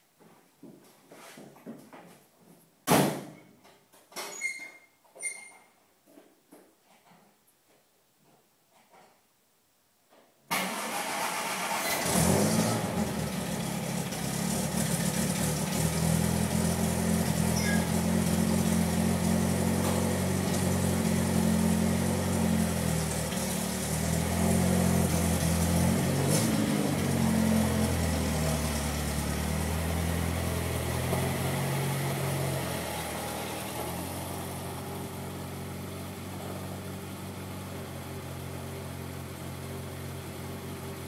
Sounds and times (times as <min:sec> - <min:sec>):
Car: 0:10.5 - 0:41.0
Medium engine (mid frequency): 0:10.5 - 0:41.0.